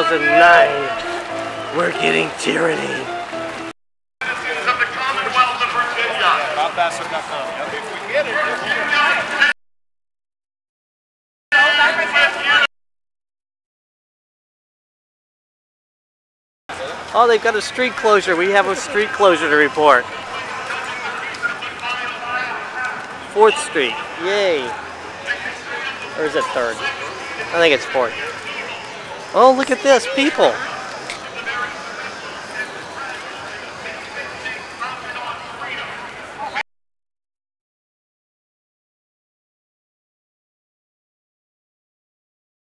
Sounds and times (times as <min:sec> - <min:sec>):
Speech: 0:00.0 - 0:03.1, 0:04.2 - 0:09.5, 0:11.6 - 0:12.7, 0:16.7 - 0:36.6
Crowd: 0:00.0 - 0:09.6, 0:11.6 - 0:12.7, 0:16.7 - 0:36.6
Outside, urban or manmade: 0:00.0 - 0:09.6, 0:11.5 - 0:12.7, 0:16.7 - 0:36.7.